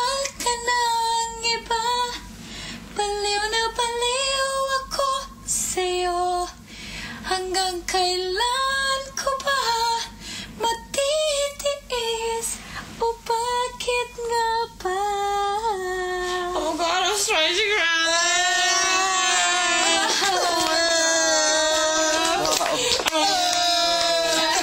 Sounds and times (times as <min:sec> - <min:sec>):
Female singing: 0:00.0 - 0:02.3, 0:03.0 - 0:06.6, 0:07.3 - 0:23.2.